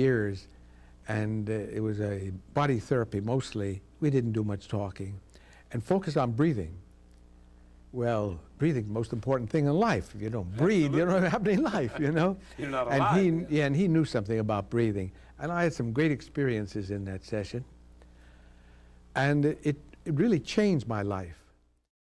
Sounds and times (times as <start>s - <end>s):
Speech: 0.0s - 0.5s, 1.1s - 6.8s, 8.0s - 17.7s, 19.2s - 21.5s.